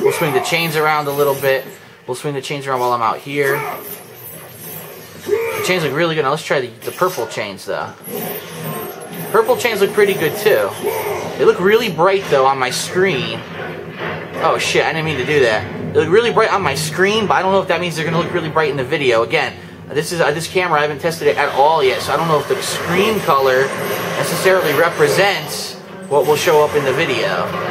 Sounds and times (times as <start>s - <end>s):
Speech: 0.0s - 3.8s, 5.6s - 8.0s, 9.3s - 13.5s, 14.4s - 27.6s.